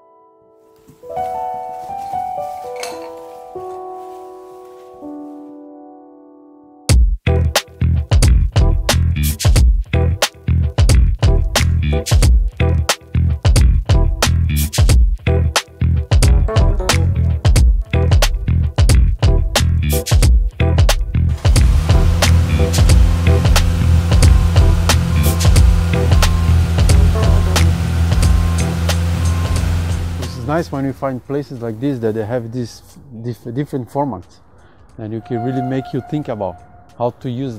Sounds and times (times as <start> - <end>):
Music: 0.0 - 31.6, 32.9 - 37.5.